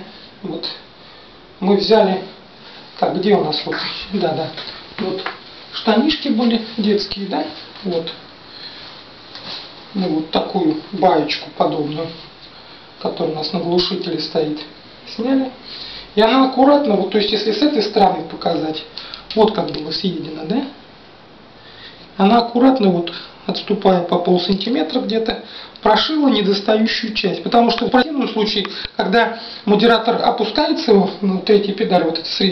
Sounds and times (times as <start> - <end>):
Speech: 0.0 - 0.9, 1.6 - 2.4, 3.0 - 8.2, 9.9 - 12.3, 13.0 - 15.6, 16.2 - 20.8, 22.2 - 32.5.